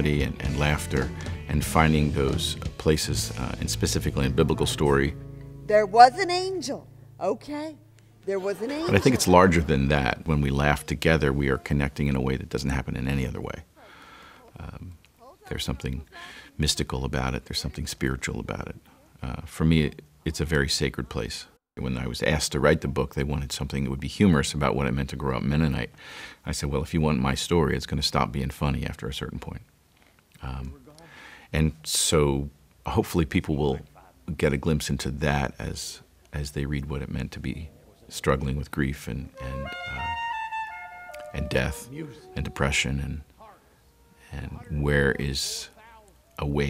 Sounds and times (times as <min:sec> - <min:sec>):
Speech: 0:00.0 - 0:13.7, 0:14.5 - 0:25.9, 0:26.5 - 0:29.6, 0:30.4 - 0:40.2, 0:41.4 - 0:43.6, 0:44.2 - 0:46.7.